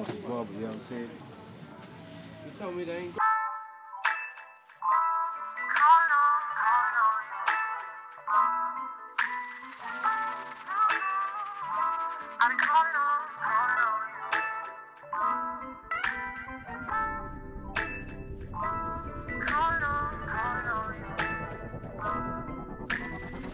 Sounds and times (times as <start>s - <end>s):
Speech: 0.0s - 1.3s, 2.4s - 3.2s
Music: 1.7s - 23.5s.